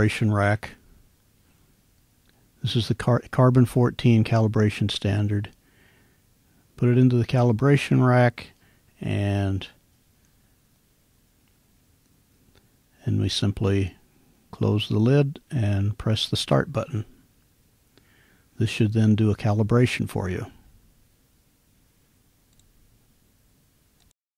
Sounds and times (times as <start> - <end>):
Speech: 0.0 - 0.8, 2.6 - 5.6, 6.8 - 9.8, 13.0 - 17.2, 18.6 - 20.7.